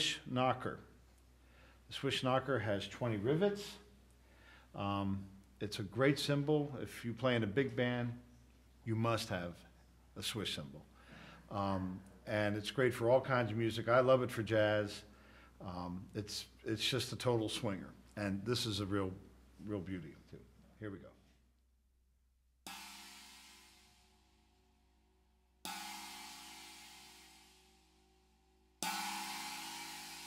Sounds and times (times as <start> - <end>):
Speech: 0.0 - 0.9, 1.9 - 3.9, 4.8 - 10.9, 11.5 - 21.2.